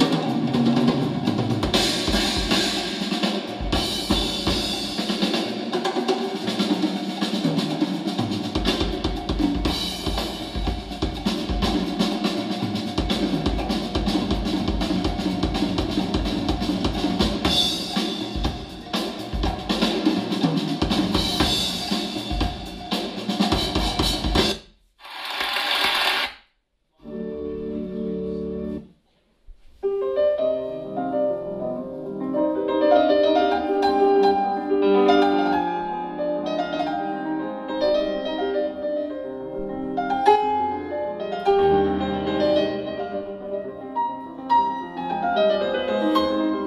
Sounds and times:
Music: 0:00.0 - 0:24.8, 0:26.9 - 0:46.6.

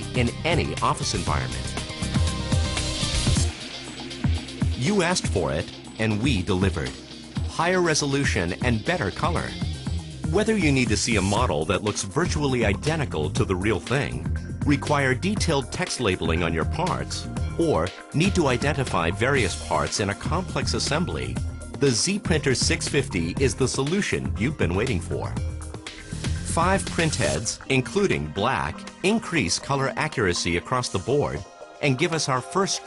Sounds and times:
Speech: 0:00.0 - 0:01.7, 0:04.8 - 0:09.6, 0:10.3 - 0:25.4, 0:26.5 - 0:32.8
Music: 0:00.0 - 0:32.8.

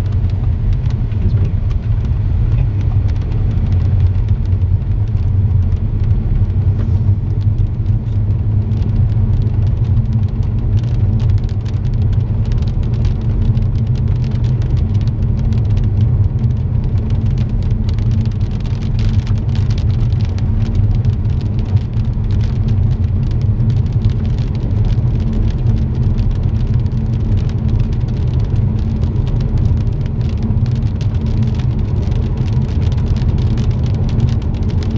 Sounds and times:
Rain on surface: 0:00.0 - 0:34.9.

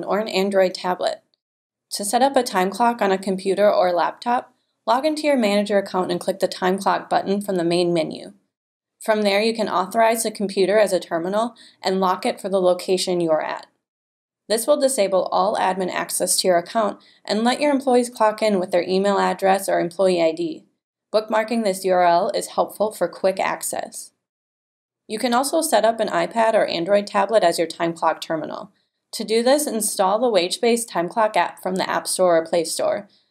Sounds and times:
Speech: 0:00.0 - 0:01.2, 0:02.0 - 0:08.3, 0:09.0 - 0:13.7, 0:14.5 - 0:20.6, 0:21.2 - 0:24.1, 0:25.1 - 0:33.0.

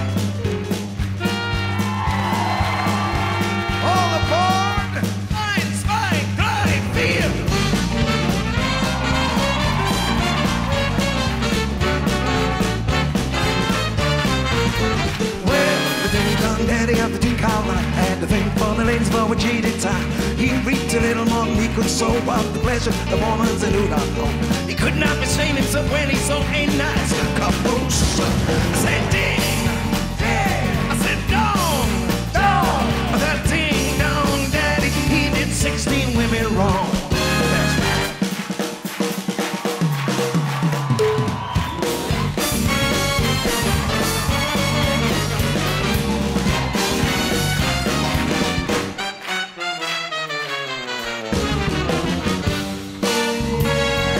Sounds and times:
Music: 0:00.0 - 0:54.1.

